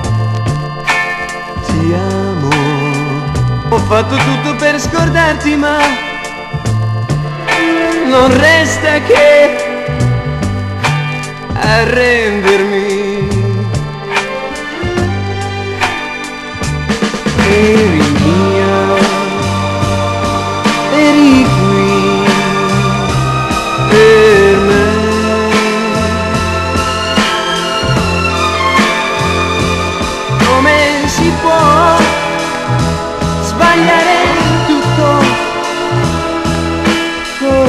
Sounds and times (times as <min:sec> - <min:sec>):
Music: 0:00.0 - 0:37.6.